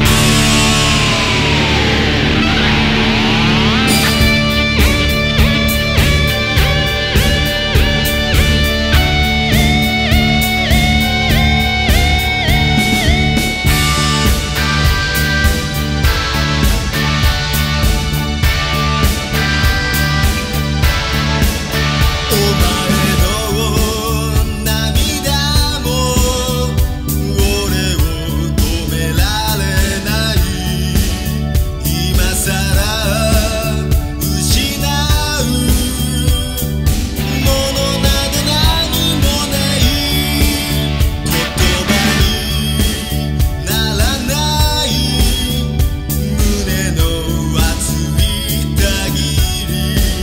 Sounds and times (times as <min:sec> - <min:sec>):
Music: 0:00.0 - 0:50.2.